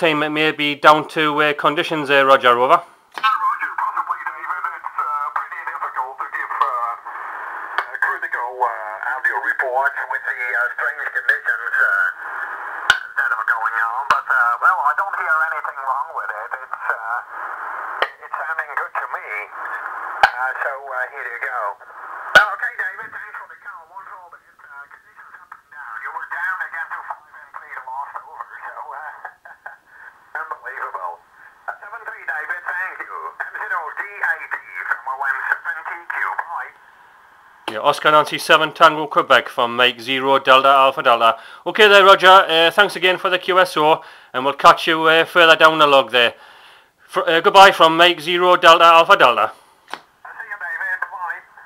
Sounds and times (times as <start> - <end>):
Speech: 0.0 - 7.1, 7.8 - 12.2, 13.0 - 17.3, 18.0 - 21.8, 22.4 - 29.8, 30.4 - 36.8, 37.7 - 46.4, 47.1 - 49.6, 50.3 - 51.6
Radio: 0.0 - 46.4, 47.1 - 49.6, 50.2 - 51.6
Inside, small room: 0.0 - 51.6.